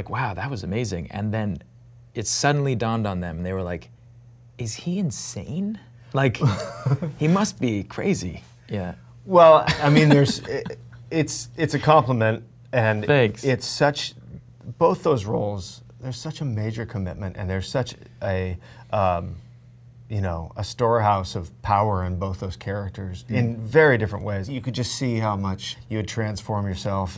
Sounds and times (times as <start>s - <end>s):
Speech: 0.0s - 3.9s, 4.6s - 6.6s, 7.2s - 19.4s, 20.1s - 27.1s.